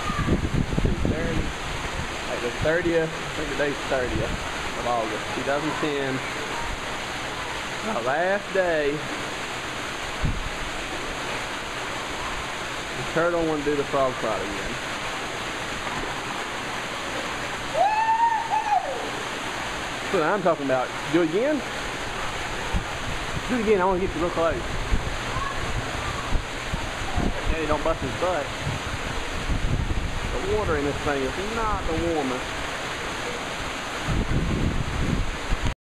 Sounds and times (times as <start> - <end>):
Speech: 30.4 - 32.4.